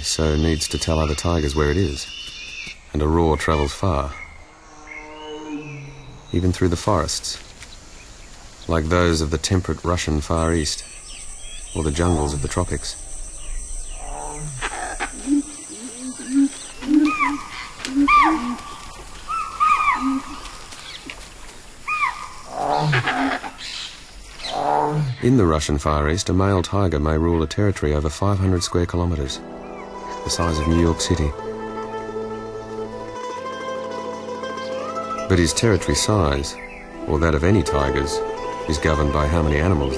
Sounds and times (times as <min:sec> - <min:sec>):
Speech: 0:00.0 - 0:02.1, 0:02.9 - 0:04.2, 0:06.3 - 0:07.4, 0:08.7 - 0:10.8, 0:11.8 - 0:13.0, 0:25.2 - 0:29.4, 0:30.2 - 0:31.4, 0:35.3 - 0:39.9
Music: 0:26.2 - 0:39.9.